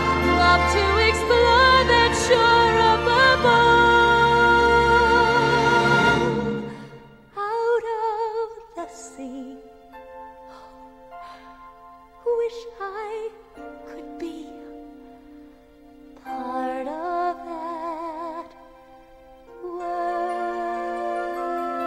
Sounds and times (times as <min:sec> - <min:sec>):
Music: 0:00.0 - 0:21.8.